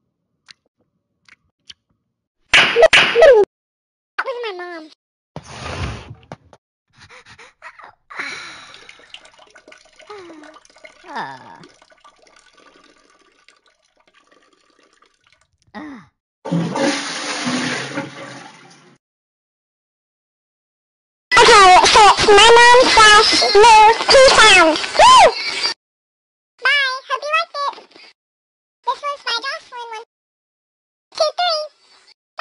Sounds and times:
Speech: 4.2 - 5.0, 7.5 - 8.0, 11.1 - 11.7, 21.3 - 25.4, 26.6 - 28.2, 28.9 - 30.1, 31.2 - 31.8.

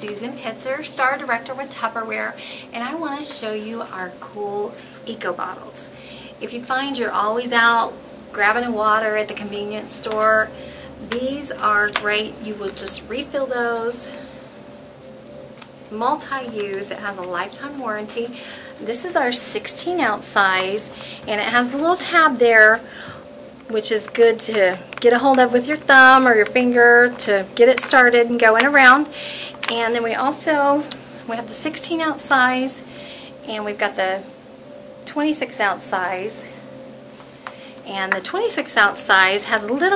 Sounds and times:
Speech: 0.0 - 14.2, 15.9 - 22.8, 23.7 - 29.1, 29.7 - 32.8, 33.5 - 34.3, 35.1 - 36.5, 37.9 - 39.9.

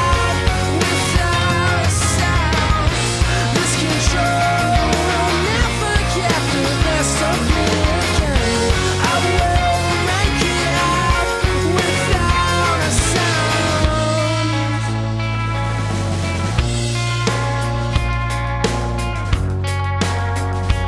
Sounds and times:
Psychedelic rock: 0.0 - 20.8.

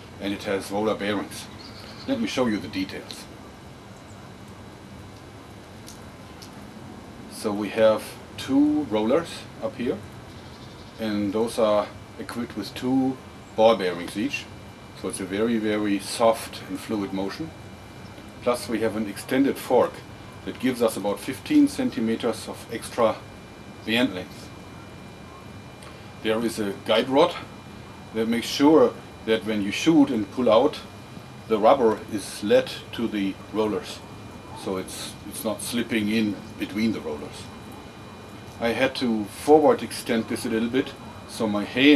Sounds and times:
Speech: 0.2 - 3.4, 7.3 - 10.1, 11.0 - 17.6, 18.4 - 24.5, 26.2 - 27.5, 28.2 - 30.9, 31.5 - 37.5, 38.6 - 41.9.

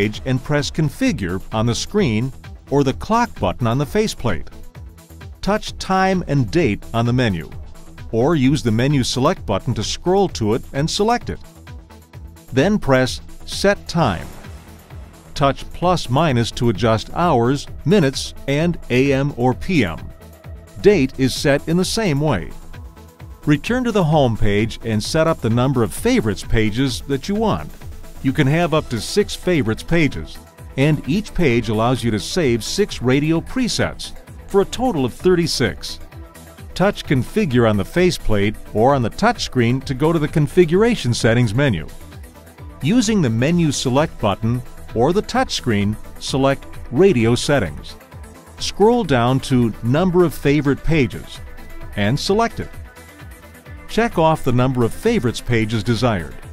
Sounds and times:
Speech: 0.0 - 4.5, 5.4 - 11.4, 12.5 - 14.4, 15.4 - 20.1, 20.8 - 22.6, 23.5 - 36.0, 36.8 - 42.0, 42.8 - 48.0, 48.6 - 52.8, 53.9 - 56.4
Music: 0.0 - 56.5.

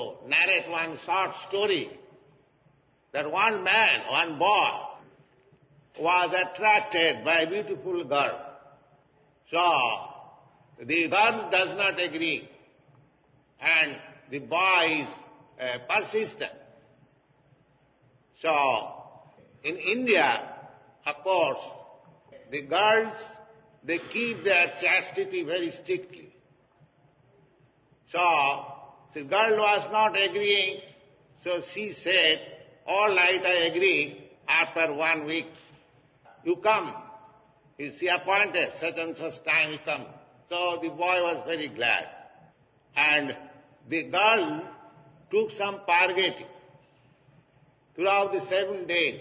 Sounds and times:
Speech: 0.0 - 2.0, 3.1 - 5.0, 6.0 - 8.5, 9.4 - 10.2, 10.8 - 12.6, 13.6 - 16.7, 18.4 - 26.3, 28.1 - 35.6, 36.3 - 37.2, 37.8 - 42.3, 43.0 - 46.6, 48.0 - 49.2.

